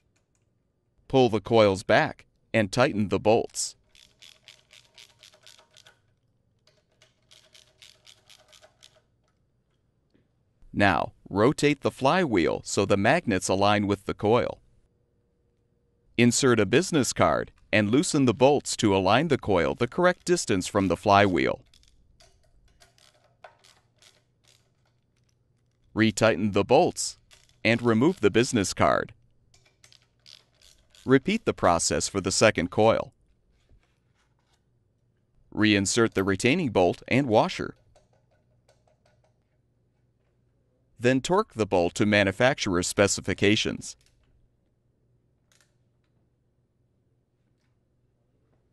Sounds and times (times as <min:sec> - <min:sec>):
Speech: 0:01.1 - 0:03.8, 0:10.8 - 0:14.6, 0:16.2 - 0:21.6, 0:26.0 - 0:29.2, 0:31.1 - 0:33.1, 0:35.6 - 0:37.8, 0:41.0 - 0:44.0.